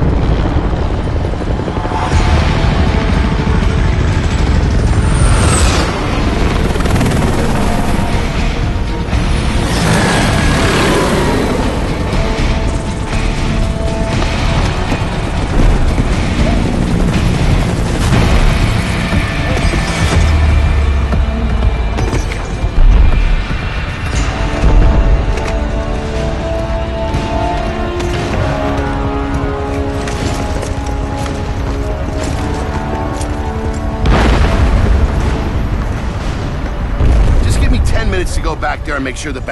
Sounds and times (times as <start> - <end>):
Music: 0.0 - 39.5
Vehicle: 1.8 - 33.9.